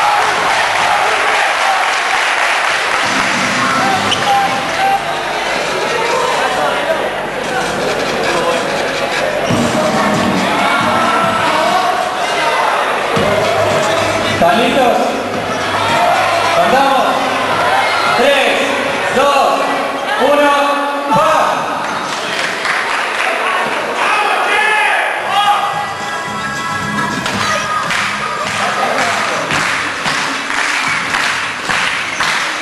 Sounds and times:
Crowd: 0.0 - 32.6
Music: 3.0 - 5.7, 9.4 - 12.1, 13.1 - 16.6, 25.3 - 32.5.

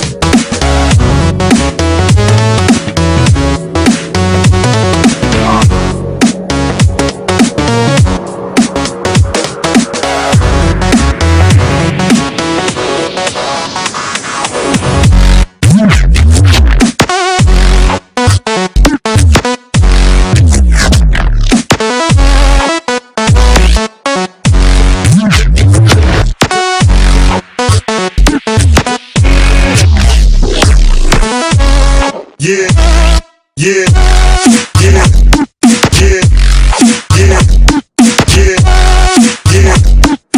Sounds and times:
Music: 0.0 - 40.3.

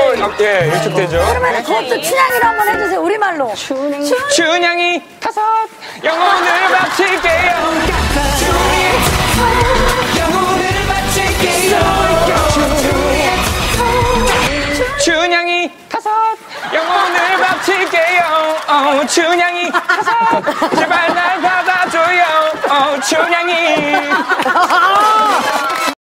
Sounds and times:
Male singing: 6.0 - 15.7, 20.7 - 24.5.

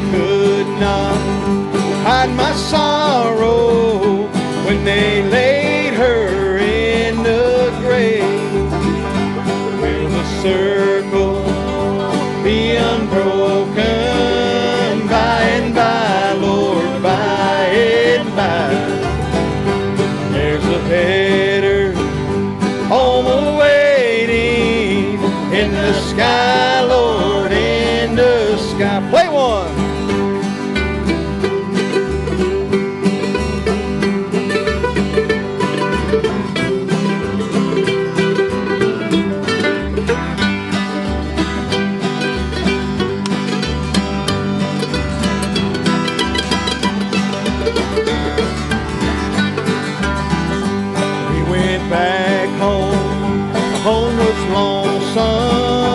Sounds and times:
Banjo: 0.0 - 55.9
Bluegrass: 0.0 - 55.9
Guitar: 0.0 - 55.9.

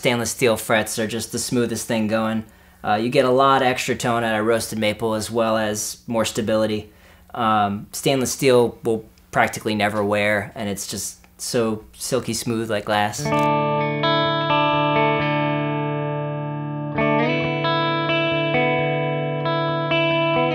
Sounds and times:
Speech: 0.0 - 13.5
Electric guitar: 13.2 - 20.5.

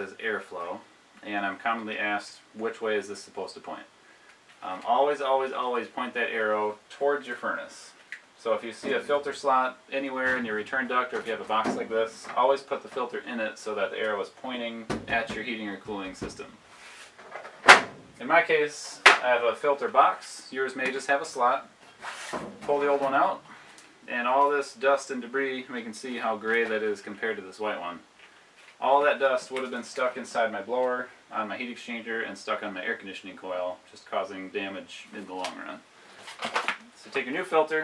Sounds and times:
Speech: 0.0 - 3.9, 4.6 - 16.6, 18.2 - 21.7, 22.6 - 28.1, 28.8 - 35.8, 36.8 - 37.8.

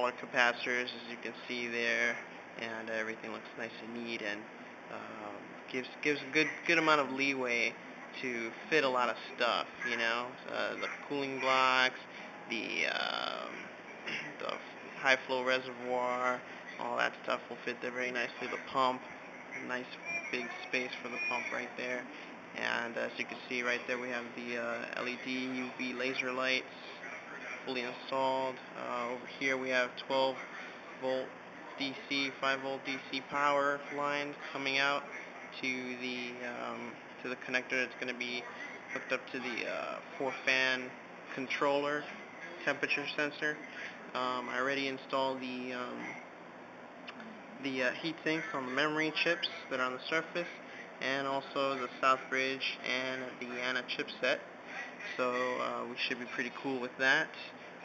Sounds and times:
Speech: 0.0 - 46.2, 47.1 - 54.5, 55.1 - 57.6.

